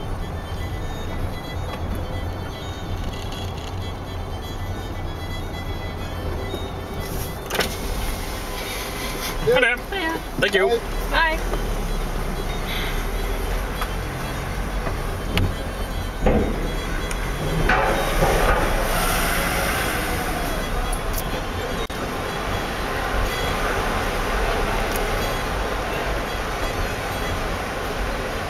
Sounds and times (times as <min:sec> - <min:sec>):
Car: 0:00.0 - 0:28.5
Music: 0:00.0 - 0:28.5.